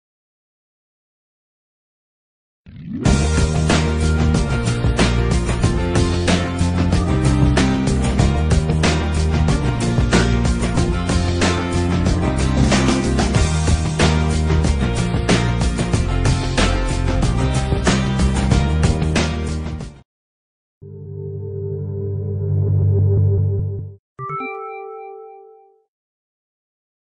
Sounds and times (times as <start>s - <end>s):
Music: 3.1s - 20.0s, 20.9s - 25.9s.